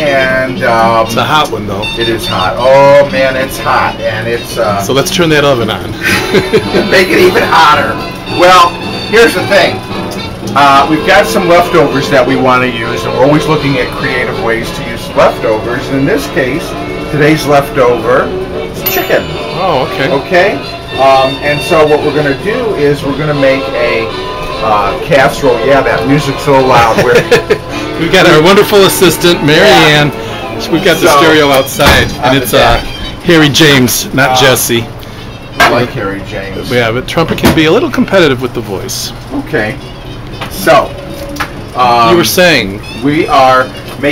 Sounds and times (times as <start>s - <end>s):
Speech: 0.0s - 6.0s, 6.9s - 9.8s, 10.6s - 18.3s, 18.9s - 27.2s, 28.0s - 34.9s, 35.6s - 39.8s, 41.8s - 44.1s
Music: 0.0s - 44.1s.